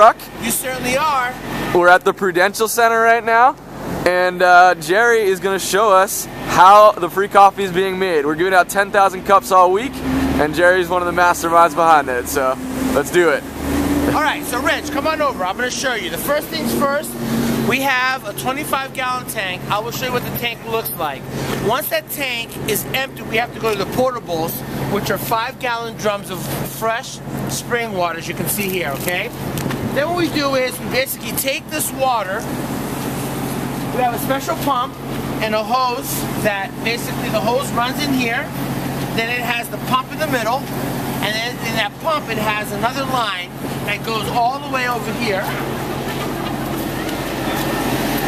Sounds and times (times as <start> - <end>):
Speech: 0.0 - 13.4, 14.1 - 32.5, 33.9 - 38.5, 39.1 - 46.3
Vehicle: 0.0 - 48.2.